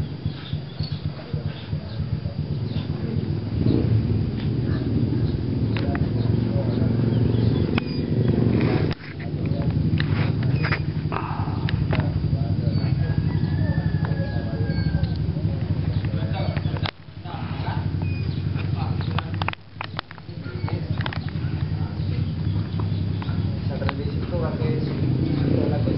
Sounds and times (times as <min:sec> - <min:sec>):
Outside, rural or natural: 0:00.0 - 0:25.9
Speech: 0:01.0 - 0:03.4, 0:04.6 - 0:09.8, 0:11.2 - 0:18.0, 0:18.6 - 0:19.5, 0:20.2 - 0:25.9.